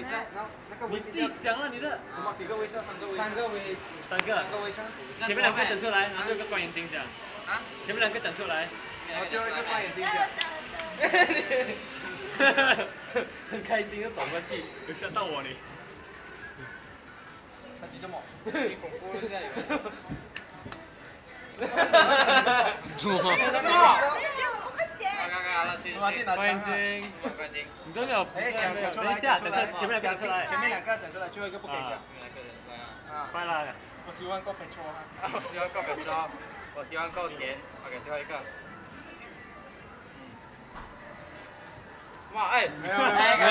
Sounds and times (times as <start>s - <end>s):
Music: 0.0s - 43.5s.